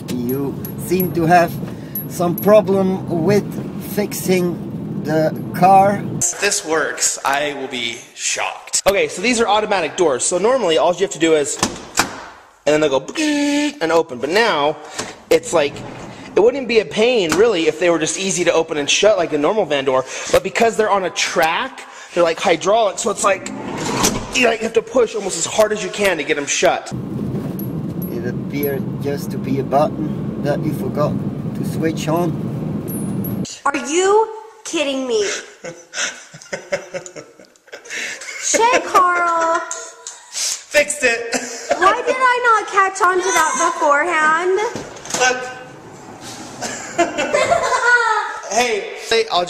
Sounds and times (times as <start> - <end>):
Speech: 0.0 - 1.6, 2.2 - 11.6, 28.1 - 32.4
Sliding door: 15.0 - 16.4, 23.4 - 24.4, 45.0 - 46.9.